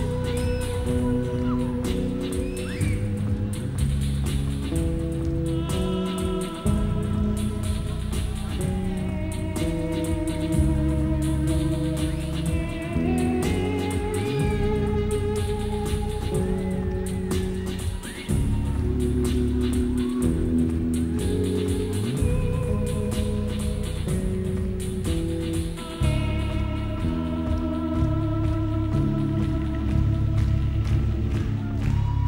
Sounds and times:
Music: 0.0 - 32.2.

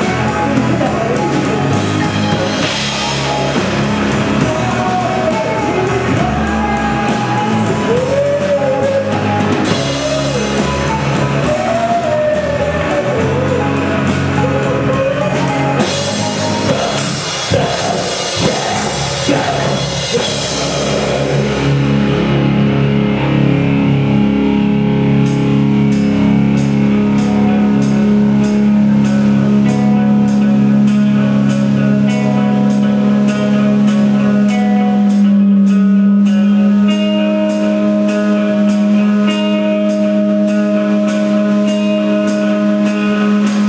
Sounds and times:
Drum: 0.0 - 23.0
Drum kit: 0.0 - 43.6
Guitar: 0.0 - 43.6.

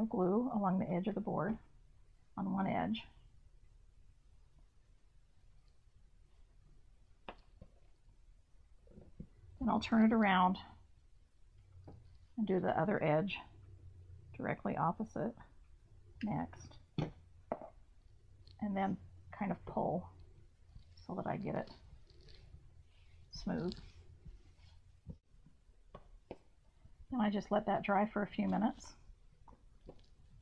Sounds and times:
Speech: 0.0 - 1.6, 2.4 - 3.1, 9.6 - 10.7, 12.4 - 13.5, 14.4 - 15.4, 16.2 - 16.7, 18.6 - 20.0, 21.1 - 21.8, 23.3 - 23.8, 27.1 - 28.9
Inside, small room: 0.0 - 30.4.

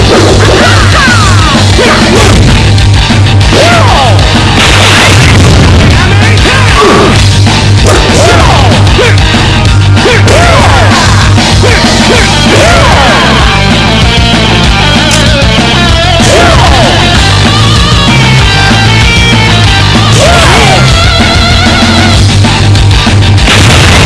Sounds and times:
Music: 0.0 - 24.0.

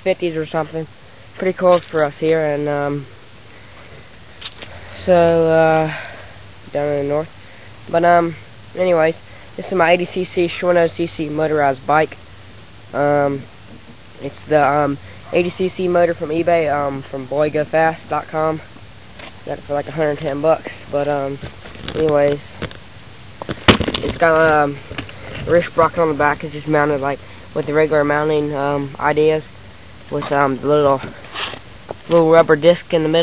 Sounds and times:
Speech: 0.0 - 3.1, 5.0 - 7.3, 7.9 - 12.2, 12.9 - 13.5, 14.2 - 18.7, 19.5 - 21.4, 22.0 - 22.6, 24.0 - 24.8, 25.4 - 29.5, 30.1 - 31.2, 32.1 - 33.2.

